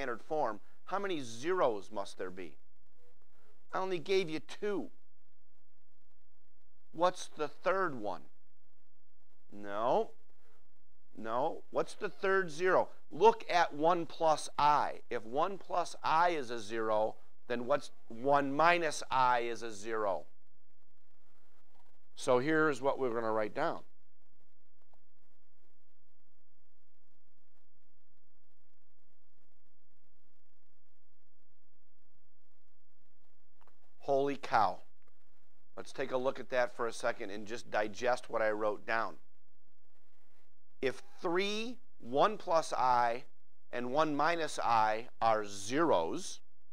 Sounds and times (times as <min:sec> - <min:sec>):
Speech: 0:00.0 - 0:02.6, 0:03.8 - 0:04.9, 0:07.0 - 0:08.3, 0:09.5 - 0:10.1, 0:11.2 - 0:20.3, 0:22.2 - 0:23.9, 0:34.0 - 0:34.9, 0:35.8 - 0:39.2, 0:40.8 - 0:46.4.